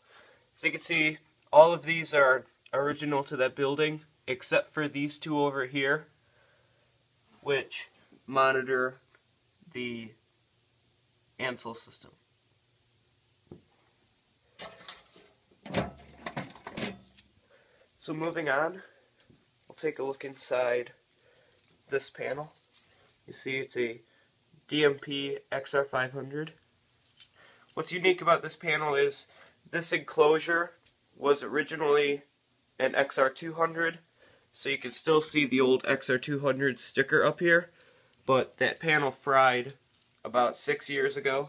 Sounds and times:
Speech: 0.6s - 6.1s, 7.4s - 9.0s, 9.7s - 10.2s, 11.4s - 12.2s, 18.0s - 18.9s, 19.7s - 21.0s, 21.9s - 22.6s, 23.3s - 24.0s, 24.7s - 26.6s, 27.8s - 34.0s, 34.6s - 37.7s, 38.3s - 41.4s.

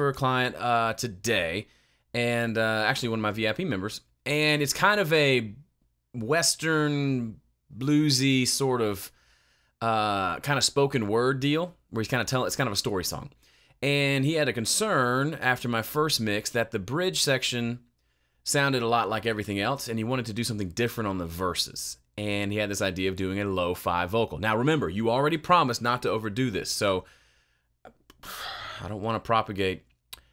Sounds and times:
Speech: 0.0s - 9.1s, 9.8s - 17.8s, 18.4s - 27.1s, 28.8s - 29.8s.

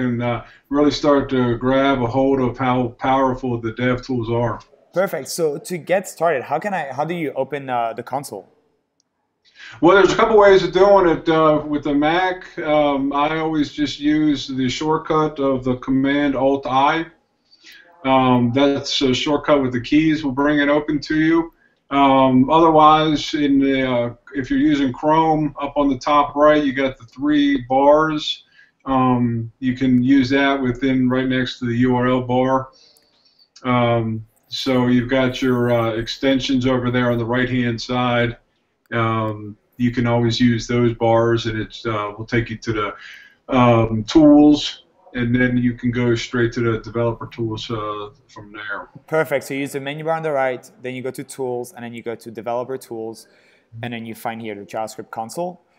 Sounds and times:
Speech: 0.0s - 8.5s, 9.7s - 32.7s, 33.6s - 55.6s.

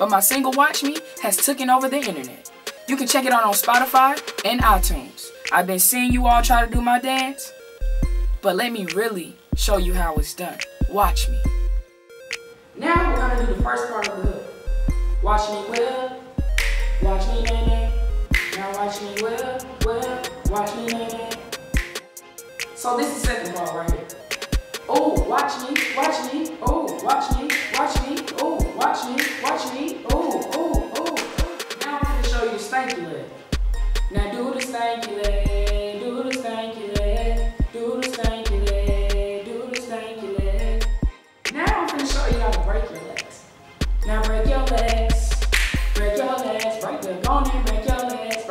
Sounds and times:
Speech: 0.0s - 7.5s, 8.4s - 11.4s, 12.8s - 14.5s, 15.2s - 16.2s, 17.0s - 18.0s, 18.6s - 21.4s, 22.8s - 24.1s, 24.9s - 30.1s, 31.8s - 33.4s, 34.2s - 37.2s, 41.5s - 43.4s, 44.0s - 45.3s, 46.0s - 48.5s
Music: 0.0s - 48.5s.

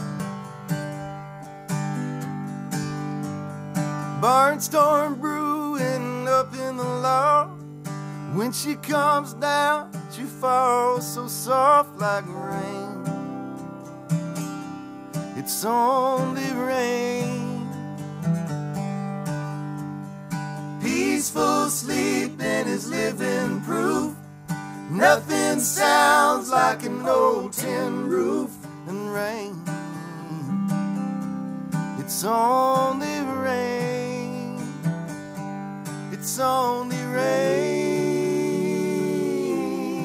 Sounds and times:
Bluegrass: 0.0s - 40.0s.

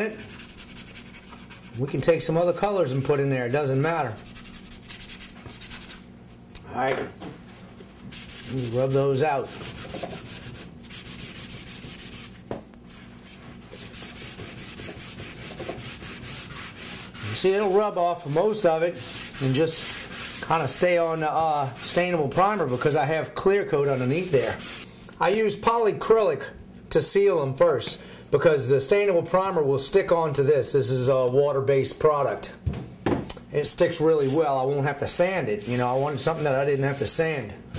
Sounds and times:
Speech: 1.8s - 4.2s, 6.6s - 7.2s, 8.5s - 9.5s, 17.2s - 24.6s, 25.2s - 32.6s, 33.5s - 37.6s.

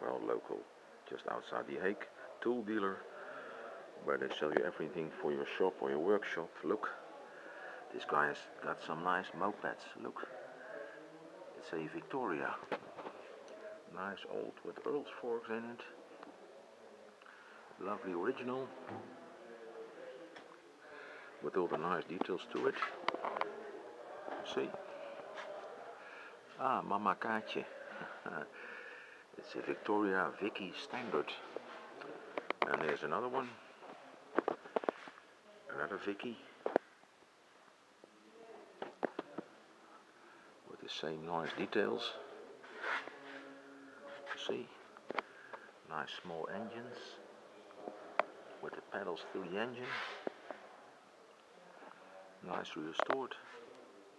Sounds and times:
Speech: 0.0s - 34.7s, 35.4s - 36.6s, 38.0s - 54.1s.

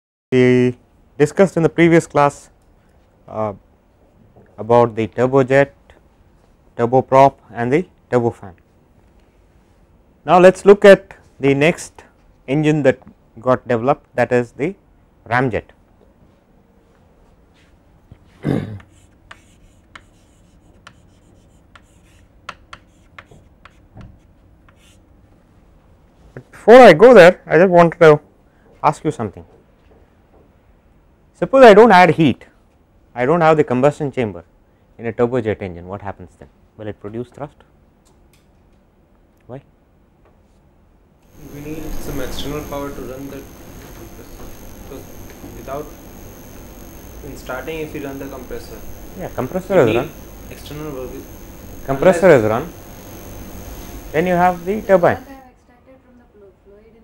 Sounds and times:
Speech: 0.4s - 2.5s, 3.3s - 3.6s, 4.6s - 5.8s, 6.8s - 8.6s, 10.3s - 15.8s, 26.4s - 28.2s, 35.0s - 37.7s, 41.5s - 45.9s, 47.2s - 51.2s, 51.9s - 52.7s.

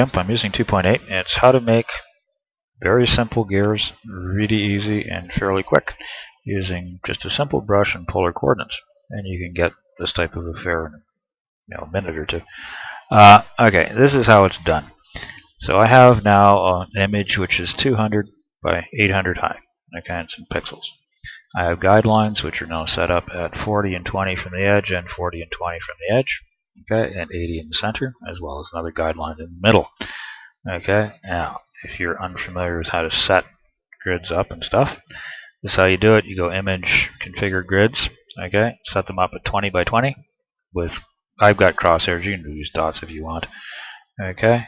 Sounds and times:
Speech: 0.0s - 2.2s, 2.8s - 11.1s, 11.7s - 30.0s, 30.6s - 44.6s.

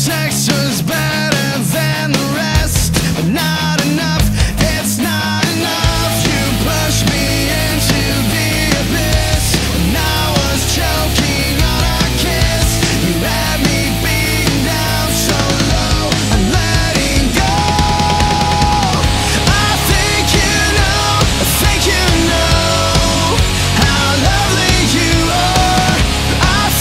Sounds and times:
Music: 0.0s - 26.8s.

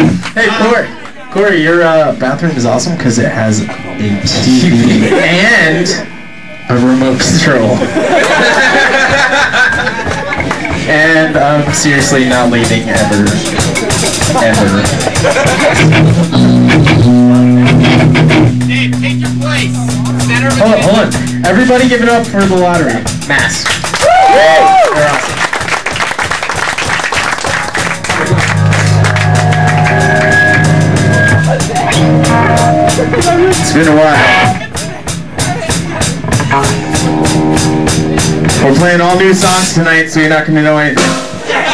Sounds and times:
Music: 2.1s - 7.6s, 8.5s - 40.1s, 40.7s - 41.7s
Speech: 10.9s - 15.0s, 18.7s - 23.7s, 38.6s - 41.1s.

